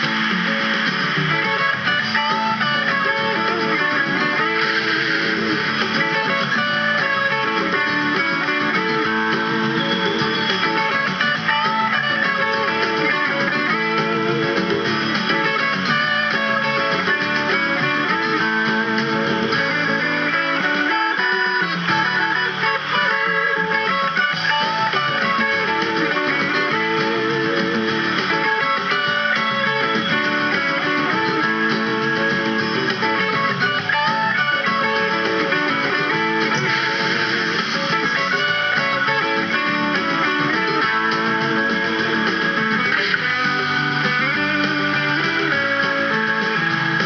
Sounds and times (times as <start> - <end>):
Electric guitar: 0.0 - 47.0.